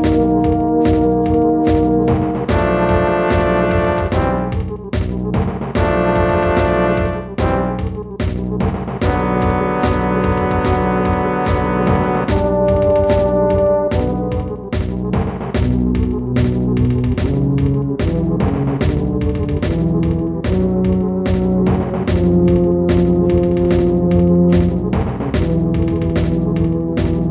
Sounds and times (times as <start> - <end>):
Music: 0.0 - 27.3.